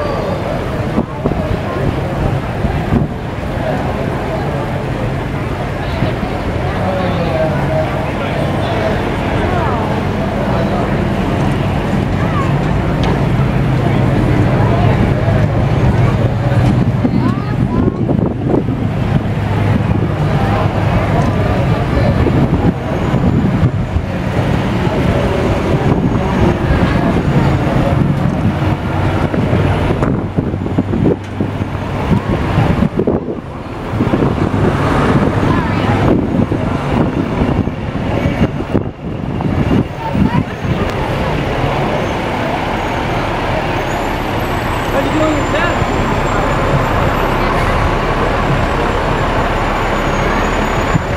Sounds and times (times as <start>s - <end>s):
Speech: 0.0s - 30.0s, 31.8s - 38.6s, 39.7s - 51.1s.